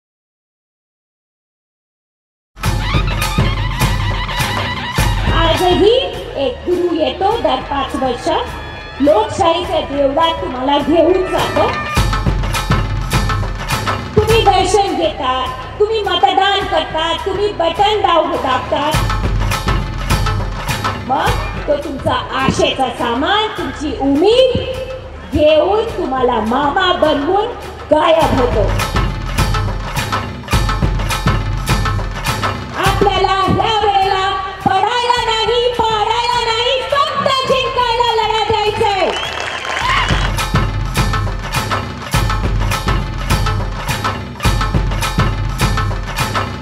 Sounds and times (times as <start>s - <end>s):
Music: 2.6s - 46.6s
Narration, monologue: 5.2s - 30.6s
Female speech, woman speaking: 5.3s - 11.8s, 14.2s - 19.1s, 21.1s - 28.8s, 32.8s - 39.2s.